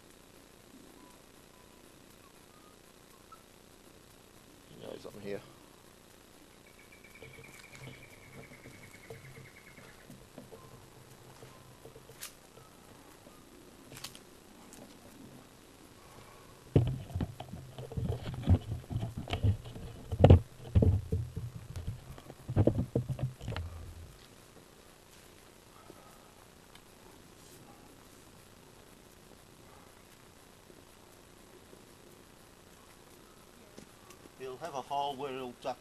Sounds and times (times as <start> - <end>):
Animal: 0.8 - 3.6, 6.6 - 13.8.